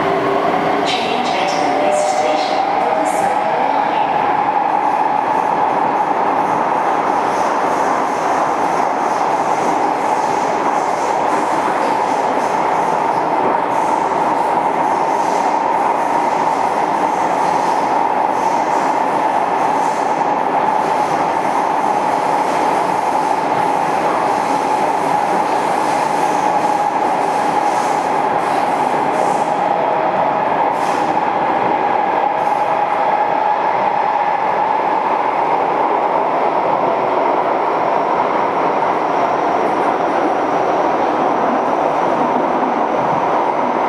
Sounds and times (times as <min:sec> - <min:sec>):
Train: 0:00.0 - 0:43.8.